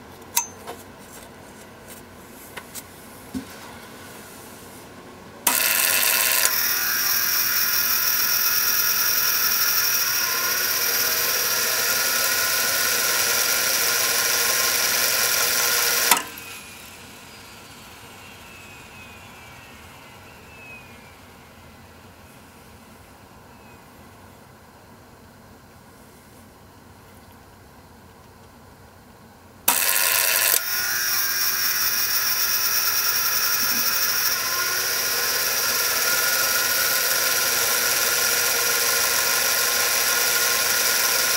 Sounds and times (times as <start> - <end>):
Engine: 3.3 - 23.8, 27.4 - 41.3.